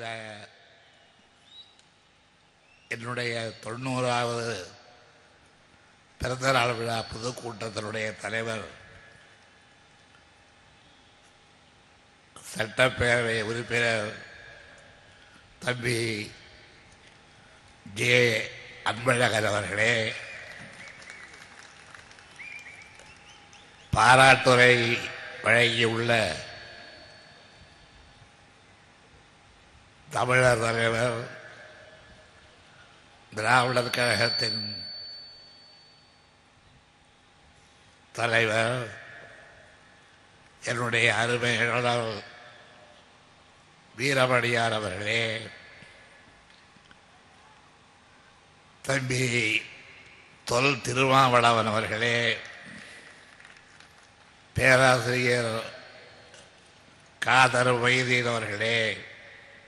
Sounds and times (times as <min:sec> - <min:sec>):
Male speech, man speaking: 0:00.0 - 0:00.5, 0:02.9 - 0:04.7, 0:06.2 - 0:08.8, 0:12.4 - 0:14.2, 0:15.6 - 0:16.4, 0:17.9 - 0:20.2, 0:24.0 - 0:26.5, 0:30.1 - 0:31.4, 0:33.4 - 0:34.9, 0:38.2 - 0:39.0, 0:40.7 - 0:42.3, 0:44.0 - 0:45.6, 0:48.9 - 0:49.7, 0:50.5 - 0:52.4, 0:54.6 - 0:55.8, 0:57.2 - 0:59.0
Narration, monologue: 0:00.0 - 0:59.6.